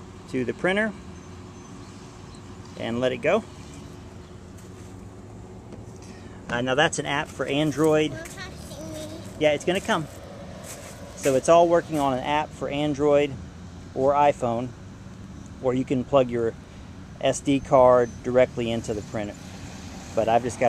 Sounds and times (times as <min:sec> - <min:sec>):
Speech: 0:00.3 - 0:01.0, 0:02.8 - 0:03.5, 0:06.5 - 0:10.1, 0:11.2 - 0:13.4, 0:14.0 - 0:14.7, 0:15.6 - 0:16.6, 0:17.2 - 0:19.4, 0:20.2 - 0:20.6.